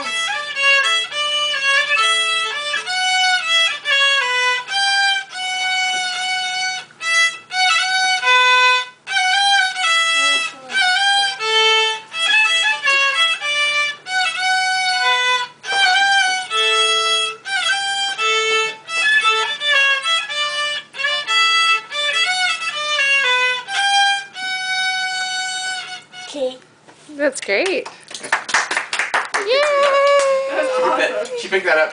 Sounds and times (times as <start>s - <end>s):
Violin, fiddle: 0.0s - 26.3s.